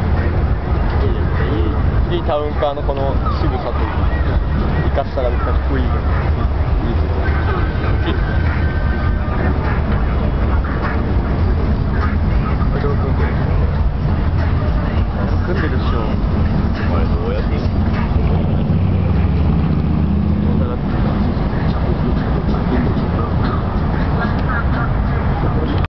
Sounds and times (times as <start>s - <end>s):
Car passing by: 3.2s - 25.8s
Speech: 20.5s - 20.9s.